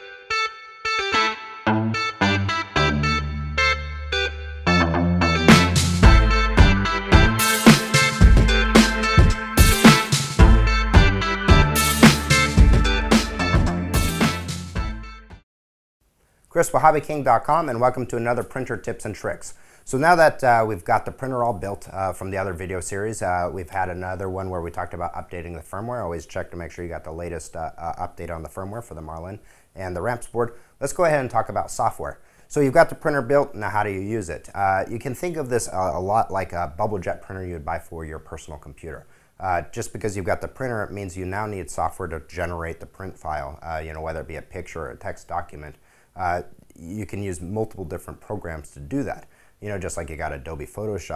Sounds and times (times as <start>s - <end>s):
Speech: 16.5s - 51.1s.